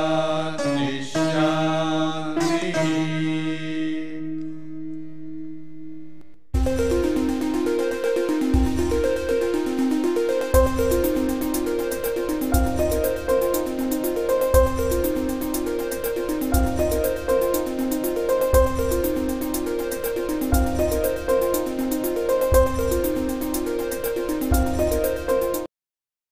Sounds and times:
Music: 0.0 - 25.7.

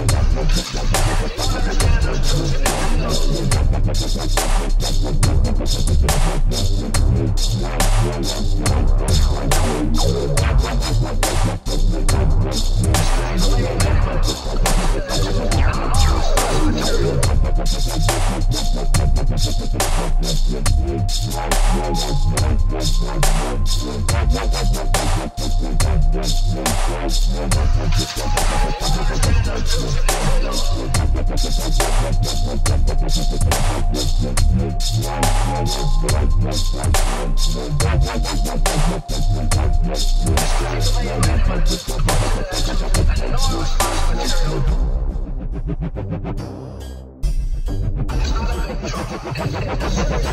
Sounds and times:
Dubstep: 0.0 - 50.3.

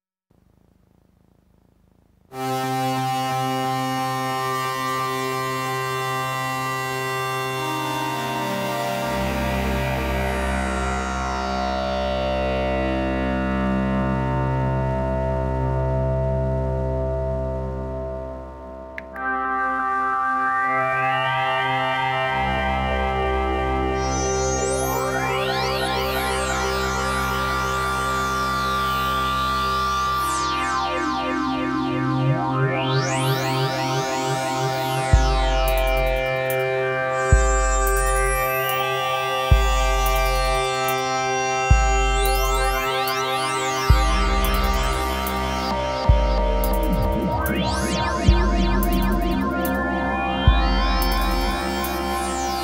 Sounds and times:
Music: 2.3 - 52.6.

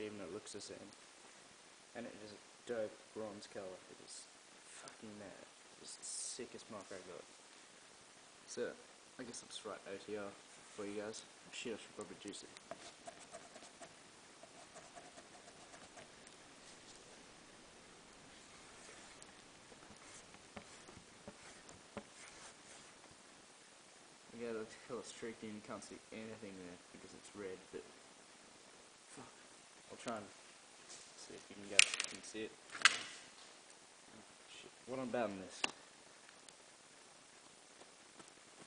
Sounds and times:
Speech: 0.0 - 1.0, 1.9 - 7.3, 8.5 - 12.6, 24.3 - 28.0, 29.1 - 30.4, 31.2 - 32.6, 34.1 - 35.8.

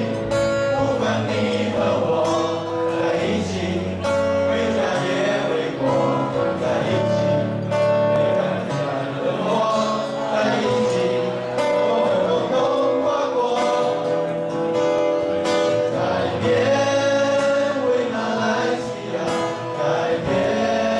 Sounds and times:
Male singing: 0.0 - 7.5, 8.1 - 14.4, 15.4 - 20.9
Choir: 0.0 - 20.9.

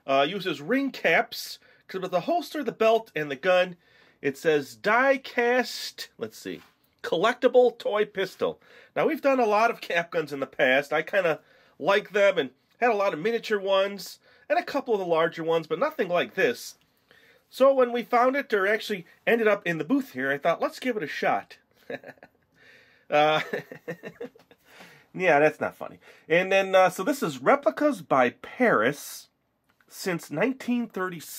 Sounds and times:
Speech: 0.0 - 16.8, 17.5 - 21.6, 23.1 - 23.7, 25.1 - 31.3.

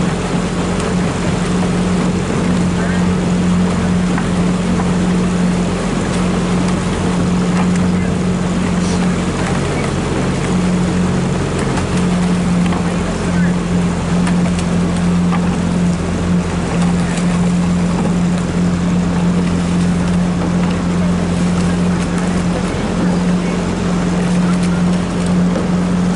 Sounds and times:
Motorboat, speedboat: 0.0 - 26.1
Rowboat, canoe, kayak: 0.0 - 26.1
Sailboat, sailing ship: 0.0 - 26.1.

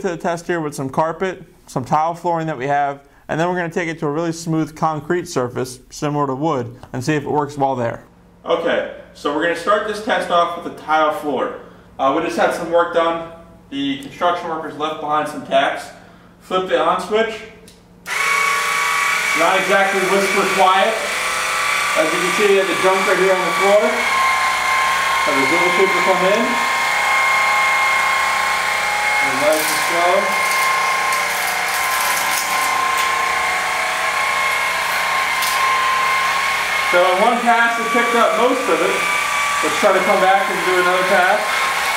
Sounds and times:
Speech: 0.0 - 17.7, 19.4 - 21.1, 22.0 - 24.1, 25.2 - 26.7, 29.2 - 30.4, 36.9 - 41.6
Inside, small room: 0.0 - 41.9
Tools: 35.4 - 35.6.

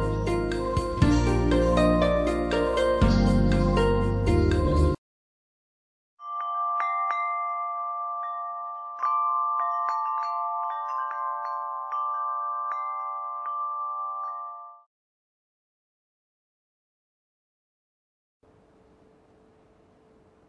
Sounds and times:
Wind chime: 6.2 - 14.9.

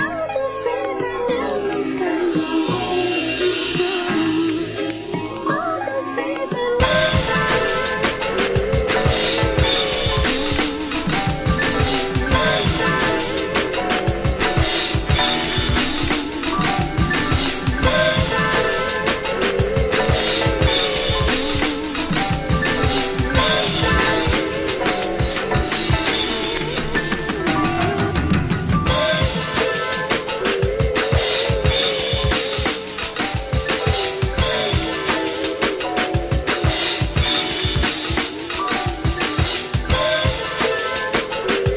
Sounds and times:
Electronica: 0.0 - 41.7.

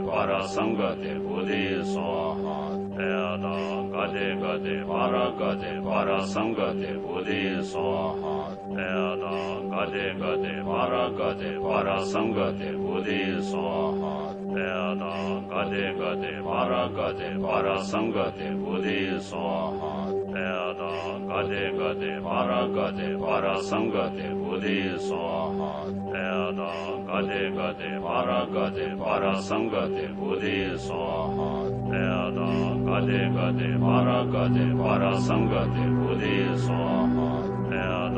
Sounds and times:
Mantra: 0.0 - 38.1.

